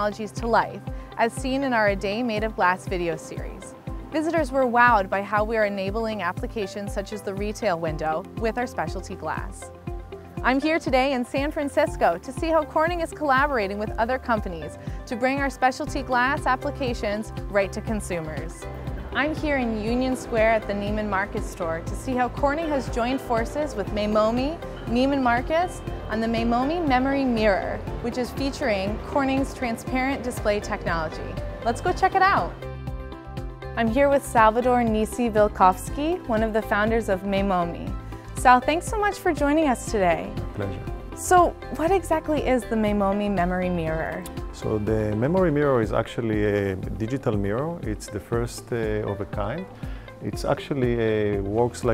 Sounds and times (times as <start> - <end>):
Music: 0.0 - 51.9.